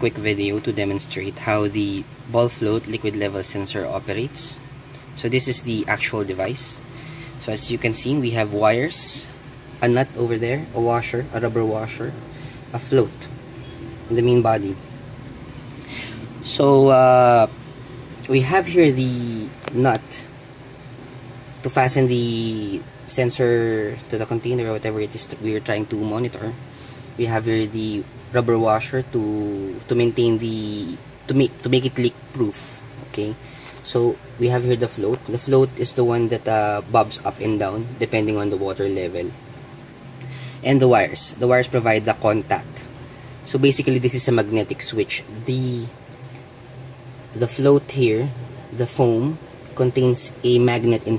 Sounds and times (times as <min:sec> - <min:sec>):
Speech: 0:00.0 - 0:13.4, 0:14.1 - 0:14.8, 0:16.4 - 0:17.6, 0:18.3 - 0:20.4, 0:21.6 - 0:26.6, 0:27.2 - 0:39.4, 0:40.6 - 0:46.0, 0:47.3 - 0:51.1.